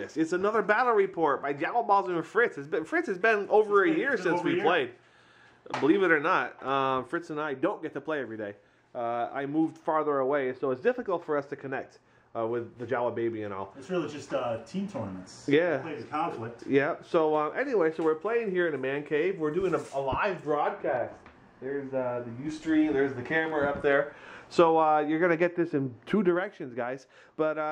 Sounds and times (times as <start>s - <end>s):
Speech: 0.0s - 5.0s, 5.7s - 27.7s
Inside, small room: 0.0s - 27.7s.